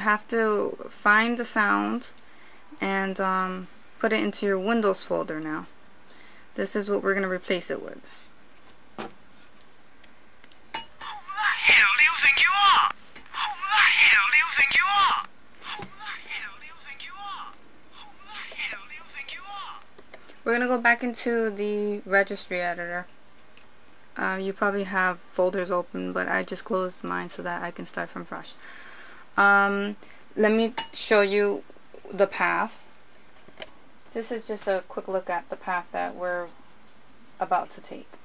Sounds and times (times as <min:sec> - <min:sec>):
Speech: 0:06.6 - 0:08.1, 0:11.0 - 0:19.8, 0:20.5 - 0:23.1, 0:24.2 - 0:28.6, 0:29.4 - 0:32.8, 0:34.1 - 0:36.6, 0:37.4 - 0:38.1.